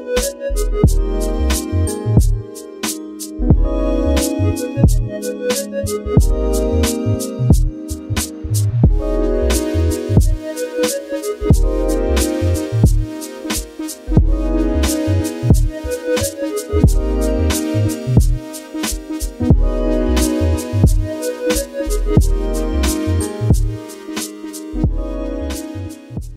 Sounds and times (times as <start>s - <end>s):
Music: 0.0s - 26.3s.